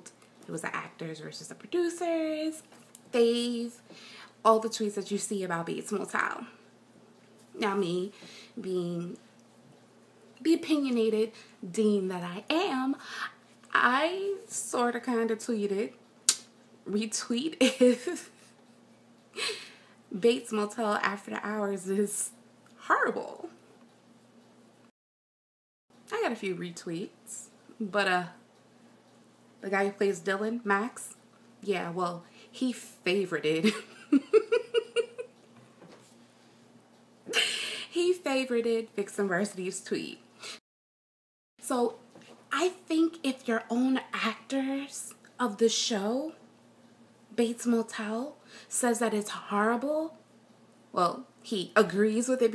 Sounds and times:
Speech: 0.0s - 3.8s, 4.5s - 6.6s, 7.6s - 9.2s, 10.4s - 13.0s, 13.7s - 16.0s, 16.9s - 18.3s, 20.2s - 23.6s, 26.1s - 28.4s, 29.6s - 33.7s, 38.0s - 40.2s, 41.6s - 46.4s, 47.4s - 50.2s, 51.0s - 52.5s
Inside, small room: 0.0s - 25.0s, 25.9s - 40.6s, 41.6s - 52.5s.

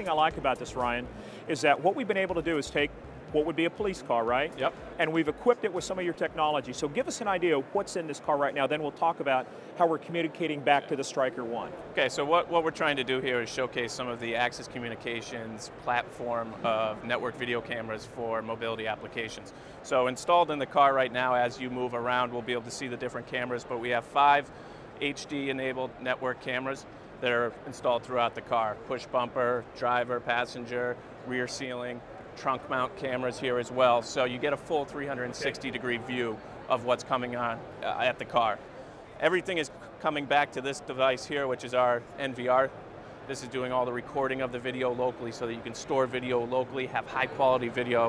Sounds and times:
Speech: 0.0s - 38.6s, 39.2s - 42.7s, 43.3s - 48.0s.

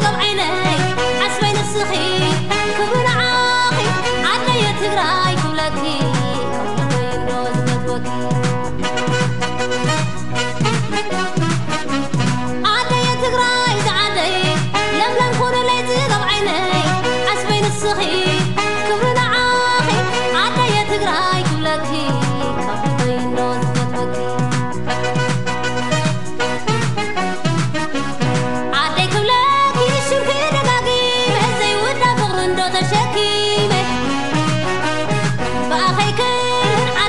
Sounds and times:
Female singing: 0.0s - 8.4s, 12.7s - 24.2s, 28.8s - 34.2s, 35.7s - 37.0s
Music: 0.0s - 37.0s.

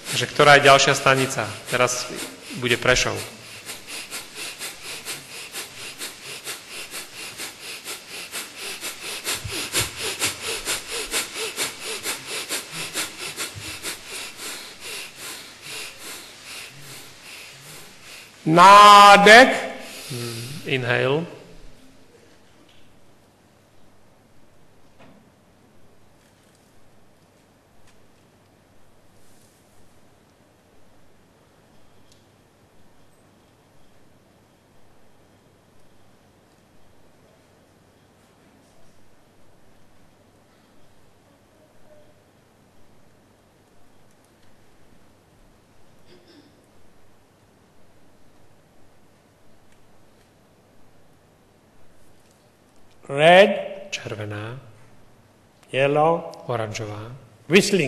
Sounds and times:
Breathing: 0.0s - 18.5s, 19.7s - 20.7s, 40.5s - 40.9s
Speech: 0.1s - 3.4s, 18.5s - 21.4s, 53.1s - 54.7s, 55.7s - 57.8s.

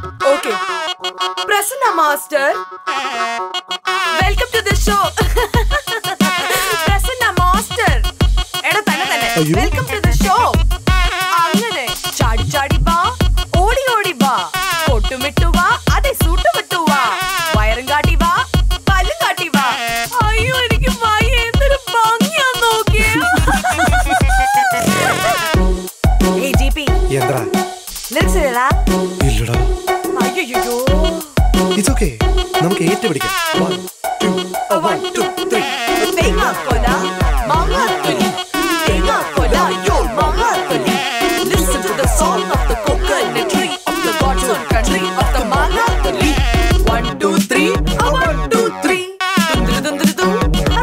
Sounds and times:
Music: 0.0s - 50.8s.

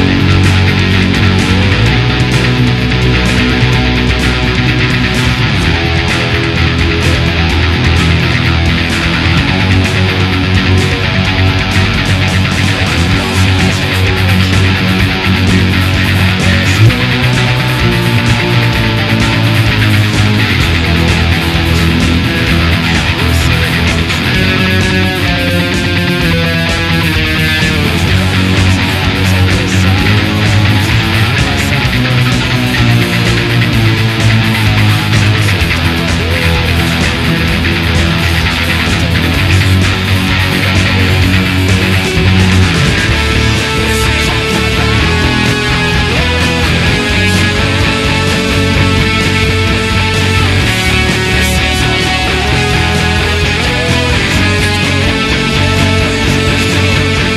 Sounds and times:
Electric guitar: 0.0s - 57.3s.

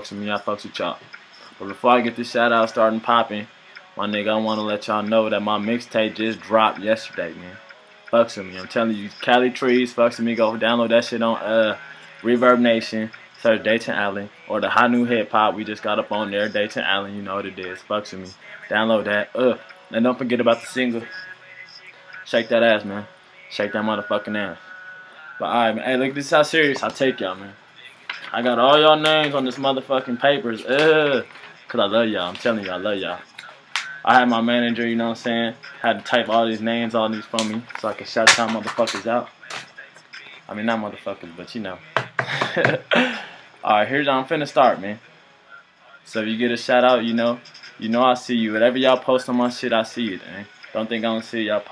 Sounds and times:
Speech: 0.0s - 7.6s, 8.2s - 21.3s, 22.3s - 24.6s, 25.4s - 27.6s, 28.2s - 41.8s, 43.6s - 45.0s, 46.1s - 51.7s.

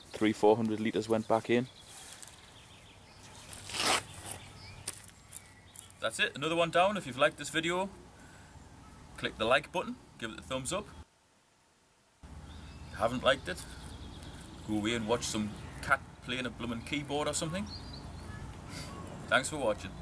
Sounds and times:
Speech: 0.2s - 1.7s, 6.0s - 8.0s, 9.2s - 11.0s, 13.0s - 13.6s, 14.7s - 17.8s, 19.2s - 20.0s.

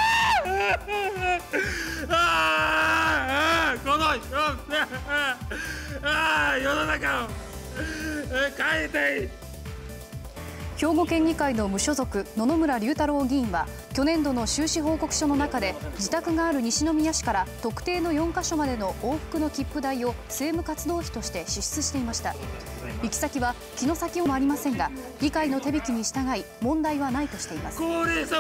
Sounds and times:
Music: 0.0s - 28.4s.

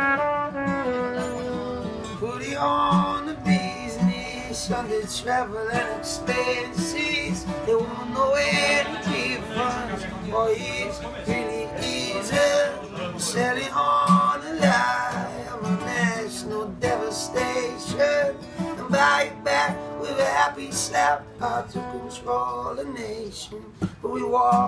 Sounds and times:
Music: 0.0s - 24.6s
Speech: 8.0s - 16.7s.

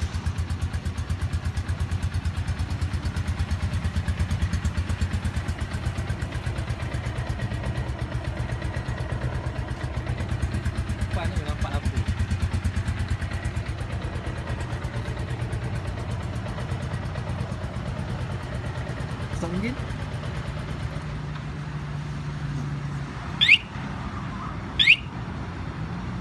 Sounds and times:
Speech: 11.1s - 12.1s, 19.3s - 19.9s.

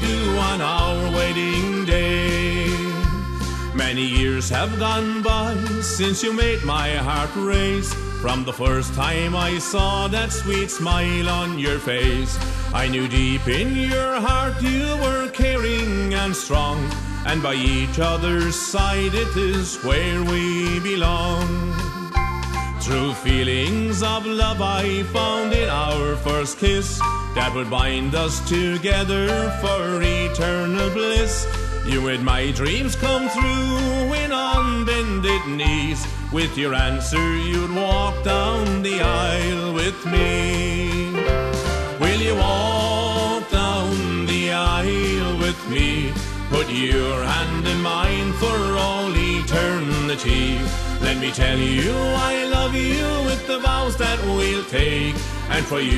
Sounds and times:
Accordion: 0.0s - 55.9s.

